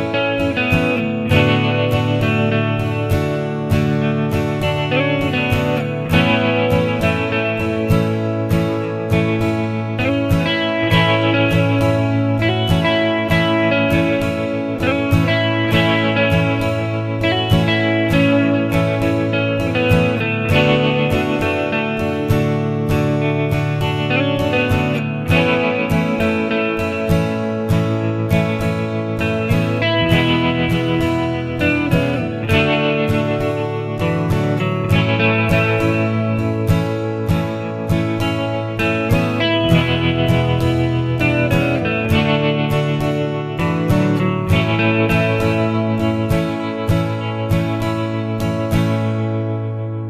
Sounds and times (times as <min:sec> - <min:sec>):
Acoustic guitar: 0:00.0 - 0:50.1.